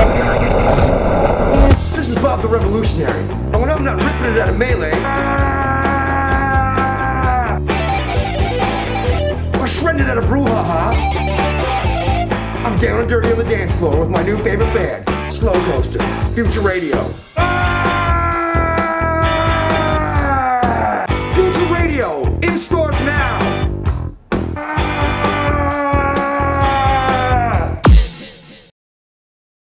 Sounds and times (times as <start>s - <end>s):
Music: 1.5s - 28.7s
Speech: 1.7s - 5.3s, 9.6s - 11.0s, 12.6s - 17.2s, 20.0s - 23.5s.